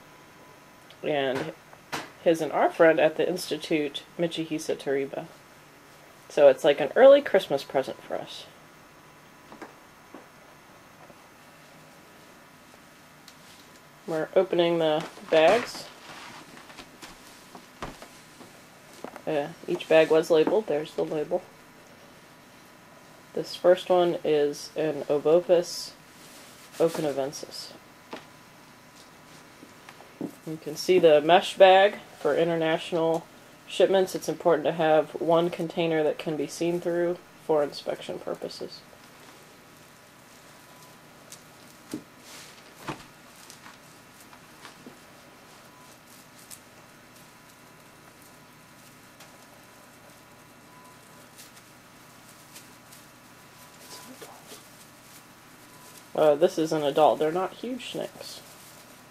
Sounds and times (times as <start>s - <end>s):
Inside, small room: 0.0s - 59.1s
Speech: 1.0s - 1.6s, 2.2s - 5.4s, 6.3s - 8.6s, 14.1s - 16.0s, 19.2s - 21.5s, 23.4s - 26.0s, 26.8s - 27.8s, 30.4s - 38.9s, 56.2s - 58.5s.